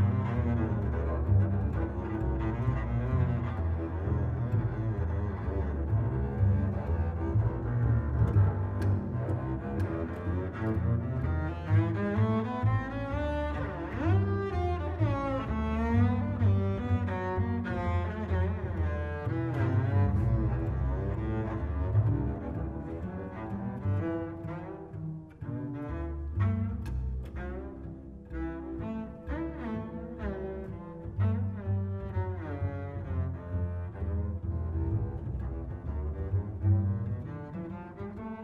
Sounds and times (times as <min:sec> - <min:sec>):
Cello: 0:00.0 - 0:38.4
Double bass: 0:00.0 - 0:38.4.